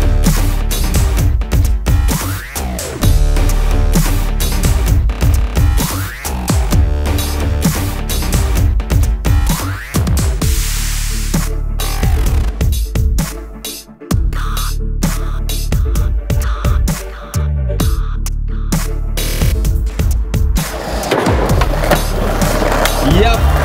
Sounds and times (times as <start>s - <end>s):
Music: 0.0s - 23.6s.